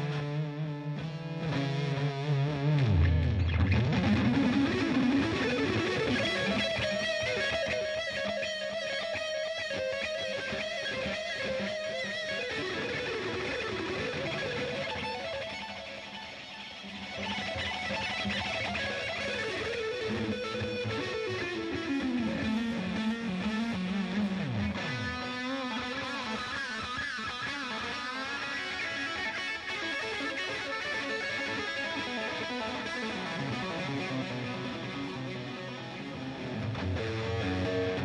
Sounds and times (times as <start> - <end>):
Electric guitar: 0.0 - 38.0.